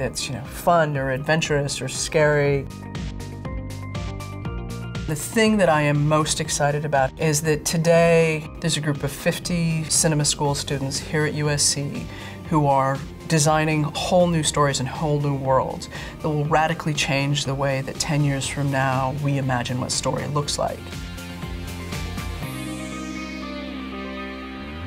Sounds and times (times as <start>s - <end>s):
Speech: 0.0s - 2.7s, 5.1s - 20.9s
Music: 0.0s - 24.8s.